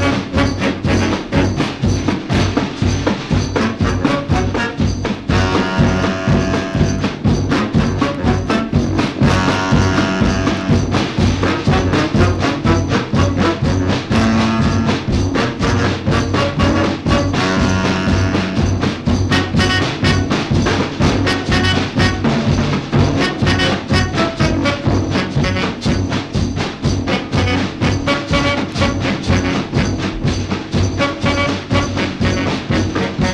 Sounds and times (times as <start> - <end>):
Music: 0.0 - 33.3.